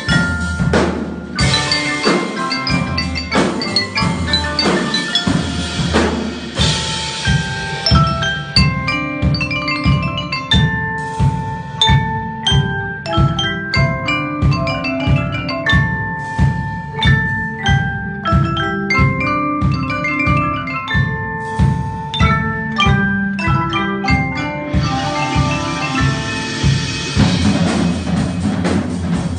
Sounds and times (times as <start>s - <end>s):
Marimba, xylophone: 0.0s - 29.2s.